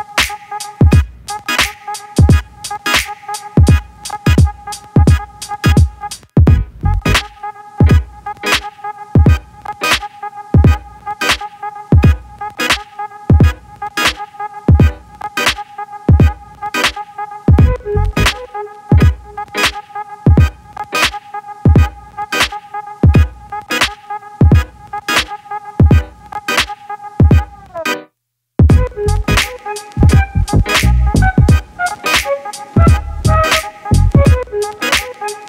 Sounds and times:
Music: 0:00.0 - 0:35.4.

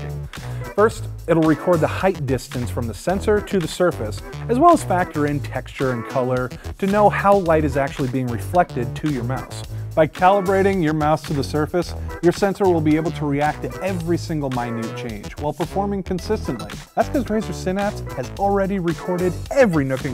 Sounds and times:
Music: 0:00.0 - 0:20.1
Speech: 0:00.8 - 0:20.1.

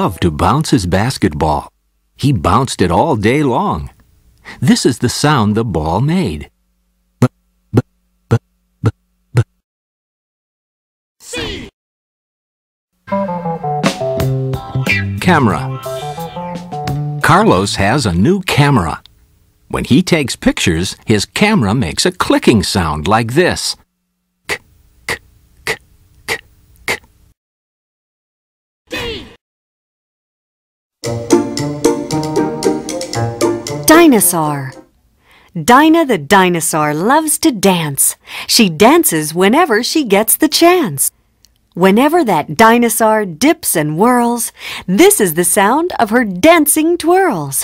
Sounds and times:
Speech: 0:00.0 - 0:04.0, 0:04.6 - 0:06.6, 0:14.9 - 0:16.0, 0:17.2 - 0:19.1, 0:19.7 - 0:23.8, 0:33.9 - 0:34.8, 0:35.6 - 0:41.1, 0:41.8 - 0:47.6.

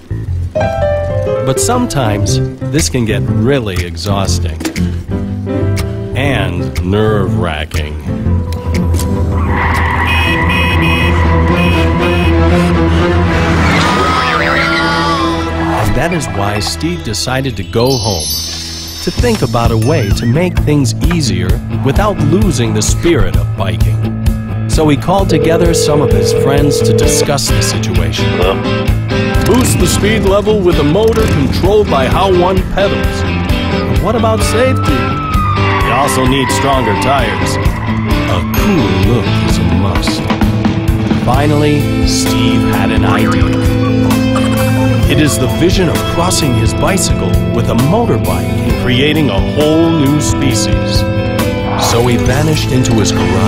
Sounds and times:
Music: 0:00.0 - 0:53.4
Speech: 0:01.4 - 0:04.7, 0:06.2 - 0:08.1, 0:13.8 - 0:18.4, 0:19.0 - 0:24.0, 0:24.7 - 0:28.6, 0:29.5 - 0:33.2, 0:33.9 - 0:35.1, 0:35.9 - 0:37.6, 0:38.3 - 0:40.3, 0:41.2 - 0:43.6, 0:45.0 - 0:51.1, 0:51.8 - 0:53.4.

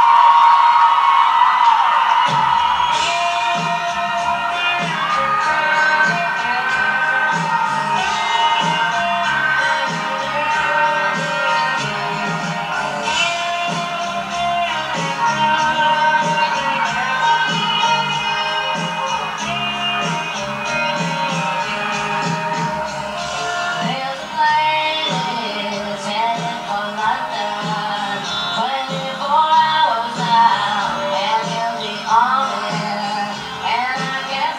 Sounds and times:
Music: 0:00.0 - 0:34.5.

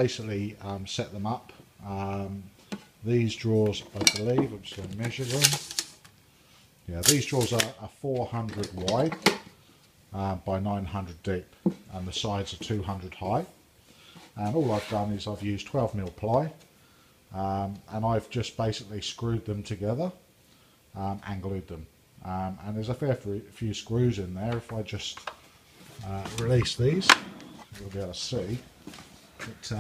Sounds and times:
Speech: 0:00.0 - 0:05.6, 0:06.8 - 0:09.3, 0:10.1 - 0:13.6, 0:14.4 - 0:16.6, 0:17.3 - 0:20.2, 0:21.0 - 0:25.3, 0:26.0 - 0:28.7, 0:29.4 - 0:29.8.

